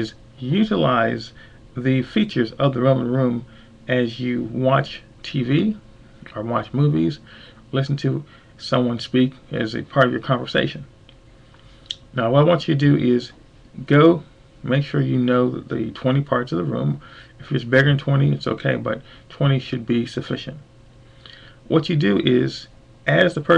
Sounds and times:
Speech: 0.0 - 10.9, 11.9 - 20.7, 21.7 - 23.5.

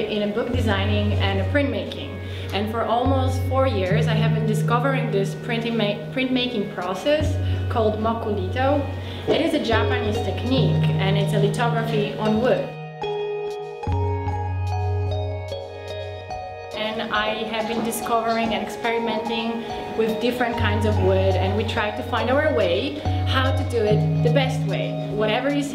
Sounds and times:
Speech: 0.0 - 12.7, 16.8 - 25.7
Music: 0.0 - 25.7.

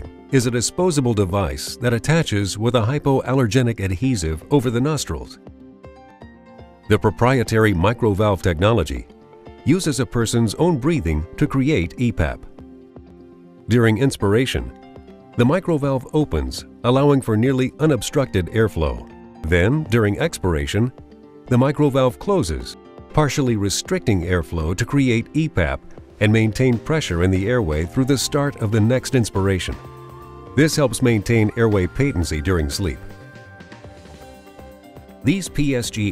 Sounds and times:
Speech: 0.0 - 5.4, 6.9 - 9.1, 9.7 - 12.5, 13.7 - 14.7, 15.4 - 29.8, 30.6 - 33.1, 35.3 - 36.1
Music: 0.0 - 36.1.

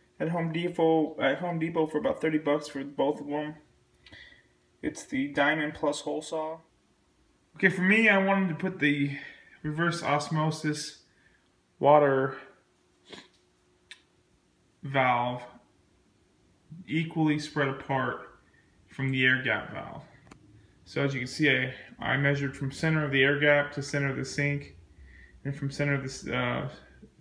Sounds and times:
Speech: 0.2 - 3.7, 4.8 - 6.7, 7.6 - 11.0, 11.8 - 12.6, 14.8 - 15.6, 16.7 - 20.1, 20.9 - 24.8, 25.4 - 27.2.

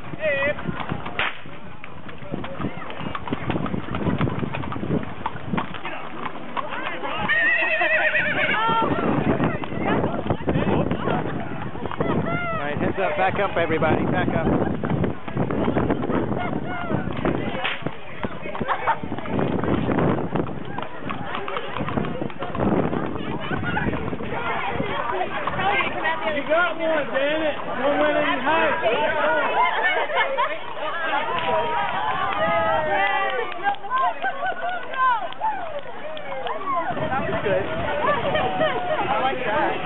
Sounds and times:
Clip-clop: 0.0 - 39.8.

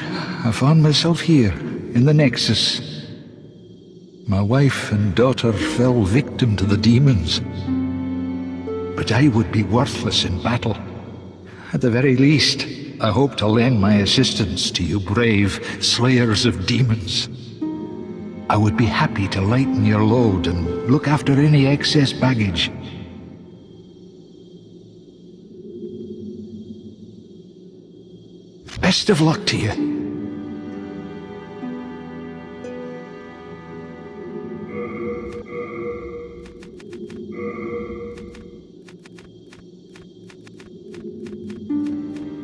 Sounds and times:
Speech: 0.0 - 3.0, 4.3 - 7.5, 9.0 - 10.8, 11.6 - 17.3, 18.5 - 23.0, 28.7 - 29.9
Music: 0.0 - 38.8, 40.7 - 42.4.

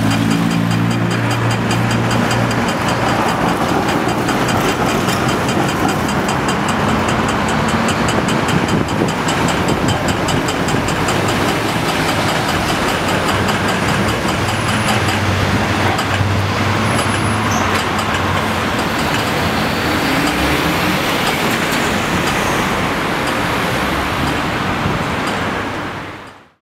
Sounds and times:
Vehicle: 0.0 - 26.6.

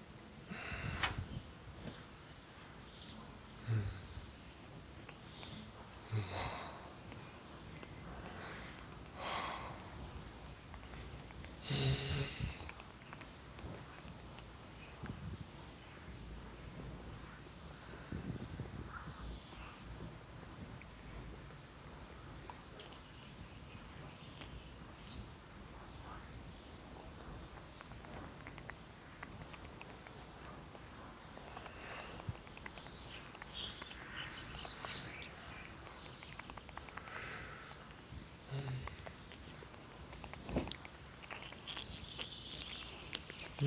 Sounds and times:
Outside, rural or natural: 27.6 - 43.6.

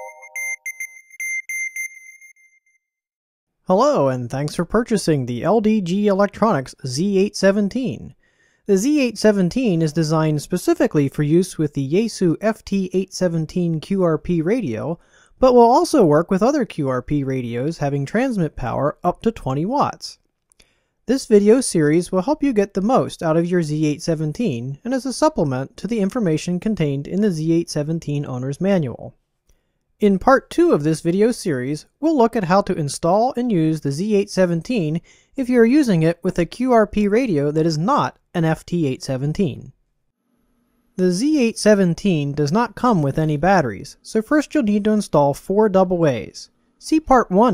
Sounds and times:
Speech: 3.7 - 20.2, 21.1 - 29.2, 30.0 - 39.8, 41.0 - 47.5.

